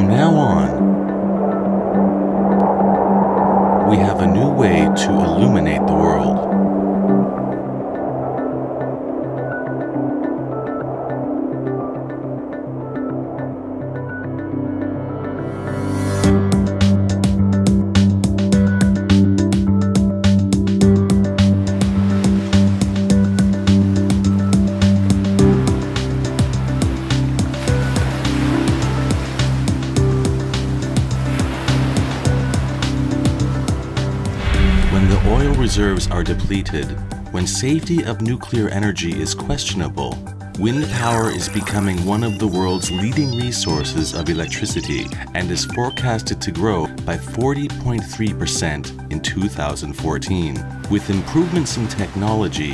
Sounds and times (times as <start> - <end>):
Waves, surf: 0.0 - 52.7.